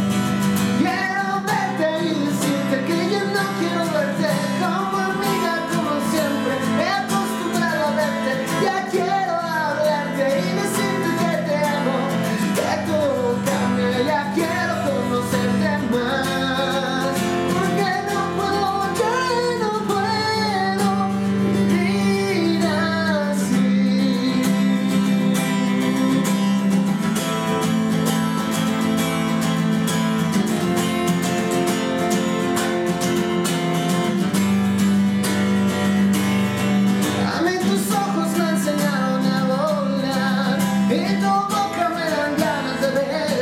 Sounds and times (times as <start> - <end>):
Music: 0.0 - 43.4.